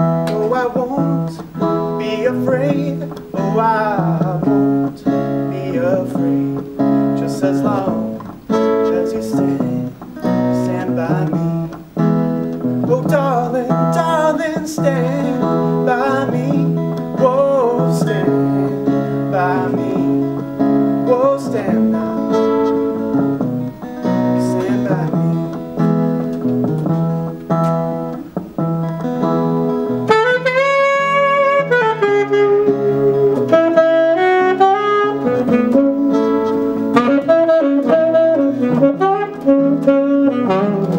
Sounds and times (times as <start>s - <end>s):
Acoustic guitar: 0.0s - 40.9s
Strum: 0.0s - 40.9s.